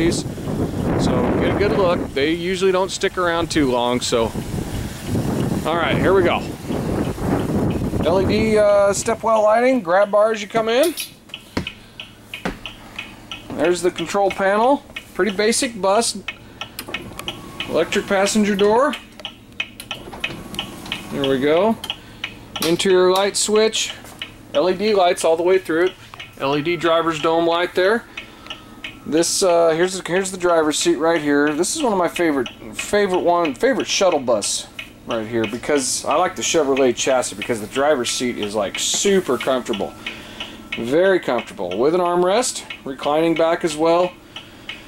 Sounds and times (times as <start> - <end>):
Speech: 0.0 - 0.3, 1.0 - 4.4, 5.6 - 6.6, 8.0 - 11.0, 13.5 - 16.3, 17.7 - 19.0, 21.1 - 21.8, 22.6 - 28.0, 29.1 - 39.9, 40.8 - 44.2.